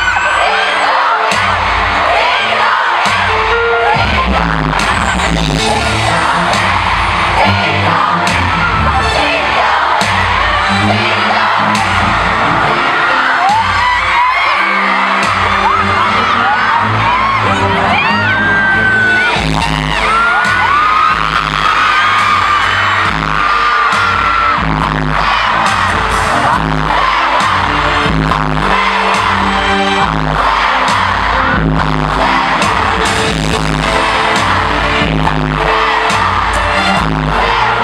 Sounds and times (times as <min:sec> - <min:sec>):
Music: 0:00.0 - 0:37.8.